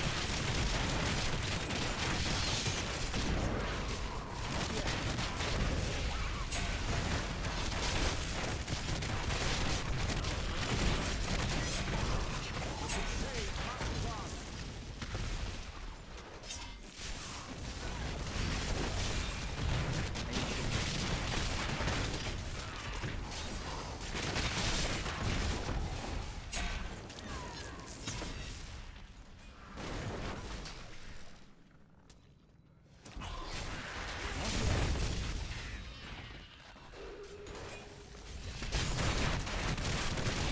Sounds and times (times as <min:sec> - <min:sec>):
Speech: 0:04.2 - 0:06.4, 0:11.6 - 0:14.4, 0:27.2 - 0:28.0.